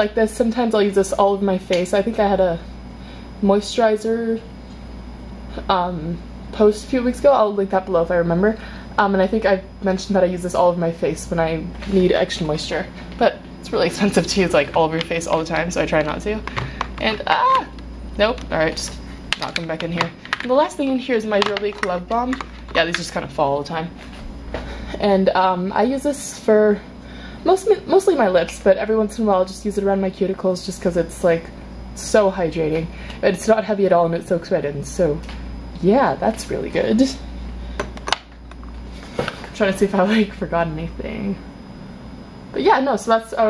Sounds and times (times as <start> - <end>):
Speech: 0.0 - 2.7, 3.4 - 4.5, 5.5 - 23.9, 25.0 - 26.8, 27.4 - 35.2, 35.8 - 37.2, 39.6 - 41.4, 42.5 - 43.5.